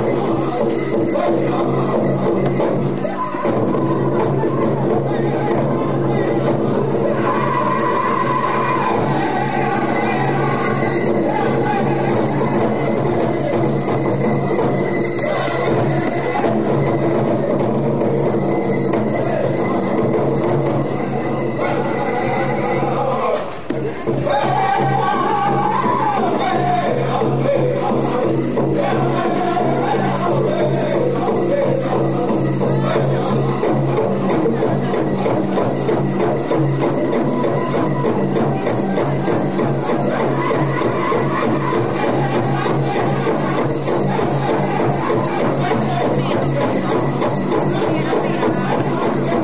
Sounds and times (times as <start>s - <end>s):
Music: 0.0s - 49.4s.